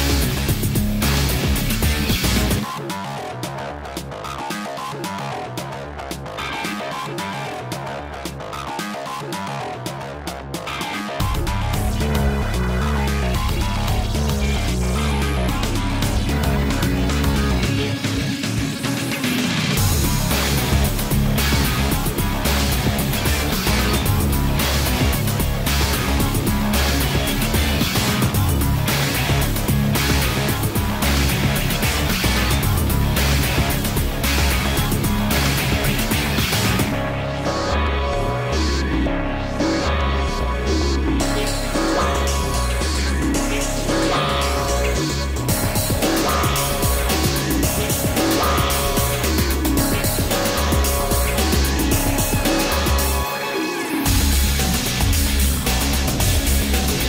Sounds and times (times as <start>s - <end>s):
Music: 0.0s - 57.0s.